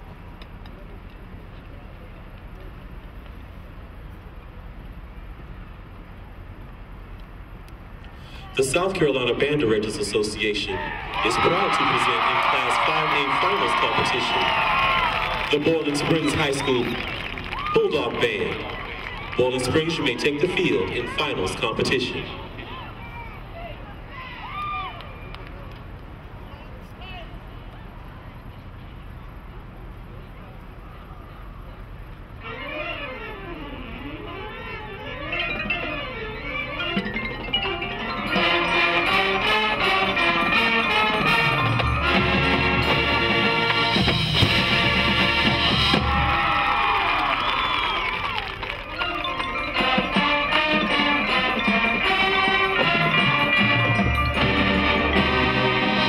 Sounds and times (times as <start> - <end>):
Speech: 8.4 - 14.5, 15.5 - 17.0, 17.8 - 18.7, 19.4 - 23.9.